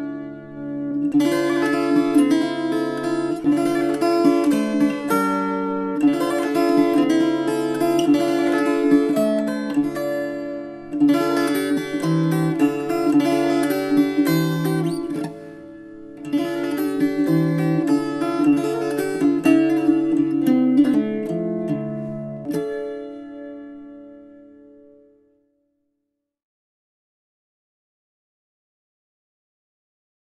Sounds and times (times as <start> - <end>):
Guitar: 0.0 - 25.5
Mandolin: 0.0 - 25.5.